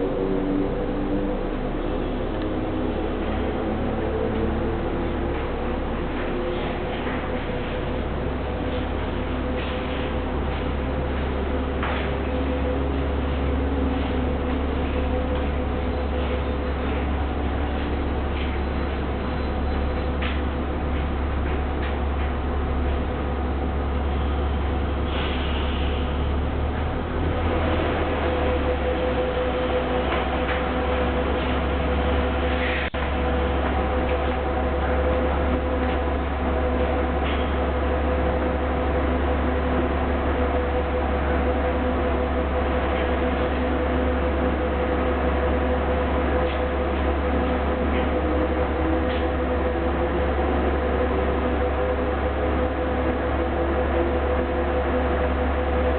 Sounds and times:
Vehicle: 0:00.0 - 0:55.9.

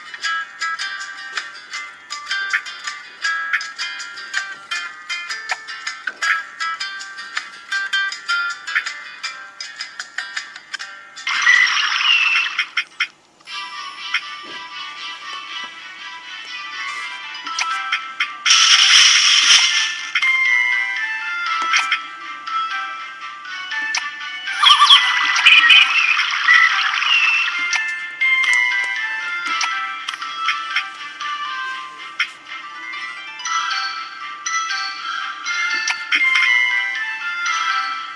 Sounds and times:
Music: 0:00.0 - 0:38.1.

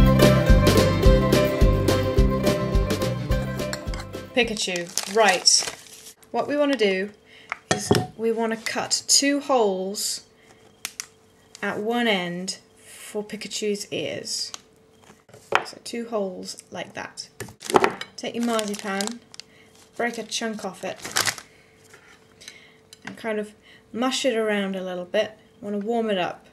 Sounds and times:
Speech: 0:04.4 - 0:05.7, 0:06.3 - 0:07.2, 0:07.8 - 0:10.3, 0:11.6 - 0:14.6, 0:15.7 - 0:17.3, 0:18.2 - 0:19.2, 0:20.0 - 0:21.0, 0:23.1 - 0:26.5.

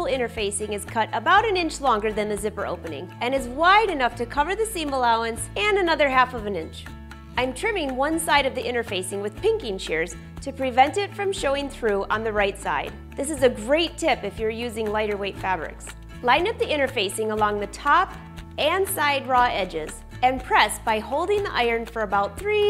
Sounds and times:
Music: 0:00.0 - 0:22.7
Speech: 0:00.0 - 0:22.7.

